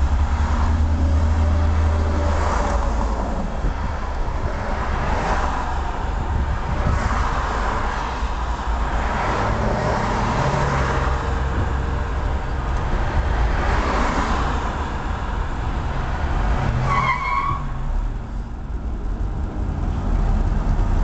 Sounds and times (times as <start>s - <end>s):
Car: 0.0s - 21.0s.